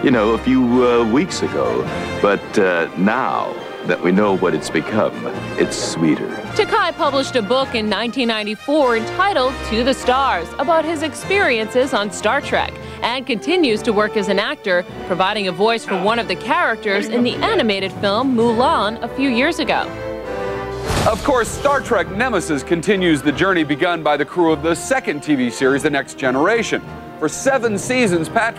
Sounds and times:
Speech: 0.0 - 19.9, 21.0 - 28.5
Music: 0.0 - 28.5.

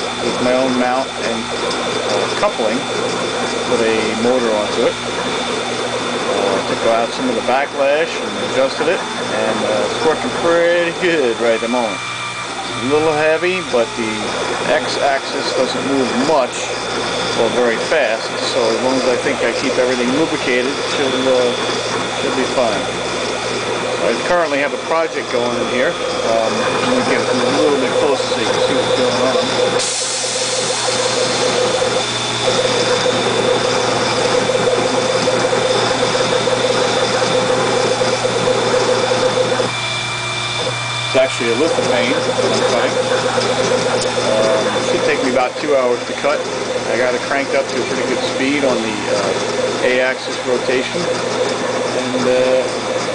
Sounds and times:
Power tool: 0.0 - 53.1
Speech: 0.2 - 1.5, 2.2 - 2.8, 3.7 - 5.0, 6.3 - 12.0, 12.8 - 16.8, 17.4 - 21.6, 22.2 - 22.9, 24.0 - 29.5, 41.1 - 43.0, 44.2 - 51.1, 52.0 - 52.7.

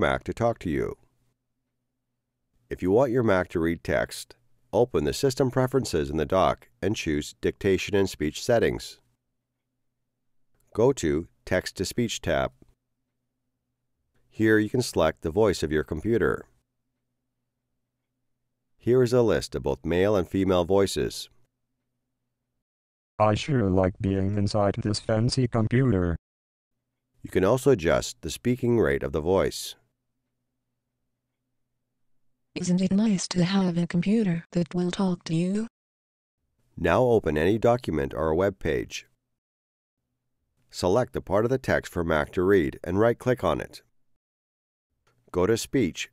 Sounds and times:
Speech: 0.0 - 1.0, 2.7 - 9.0, 10.8 - 12.6, 14.4 - 16.6, 18.8 - 21.4, 23.2 - 26.2, 27.3 - 29.8, 32.6 - 35.7, 36.8 - 39.1, 40.7 - 43.8, 45.3 - 46.1.

